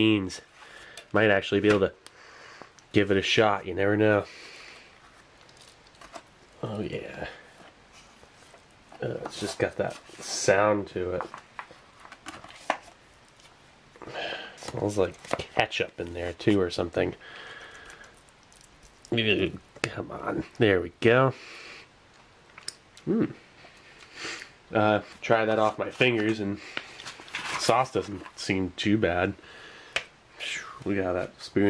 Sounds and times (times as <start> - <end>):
Speech: 0.0 - 0.5, 1.1 - 2.0, 2.9 - 4.3, 6.6 - 7.4, 9.0 - 11.3, 14.6 - 17.2, 19.1 - 21.4, 24.7 - 26.6, 27.6 - 29.4, 30.4 - 31.7
Inside, small room: 0.0 - 31.7.